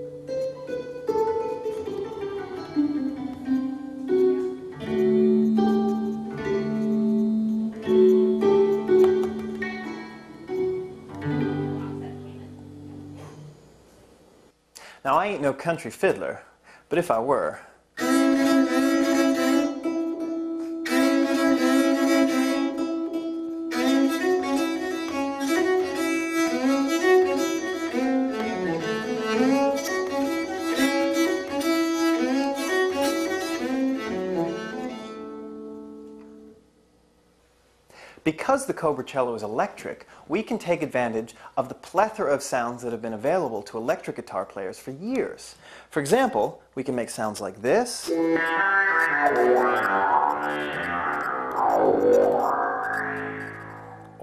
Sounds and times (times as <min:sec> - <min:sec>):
Cello: 0:18.0 - 0:35.6.